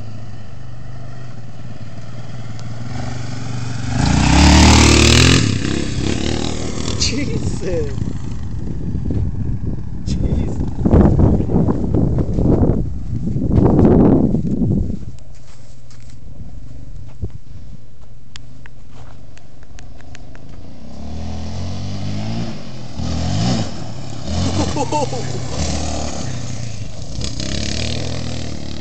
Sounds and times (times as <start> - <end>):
Motorcycle: 0.0 - 28.8.